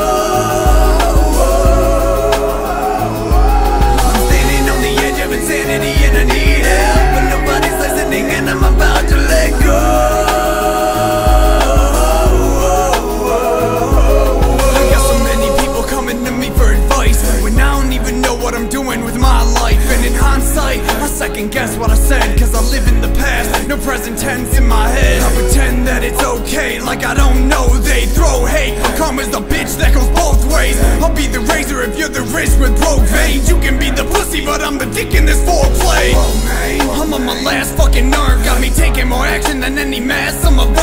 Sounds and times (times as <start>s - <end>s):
Music: 0.0s - 40.8s.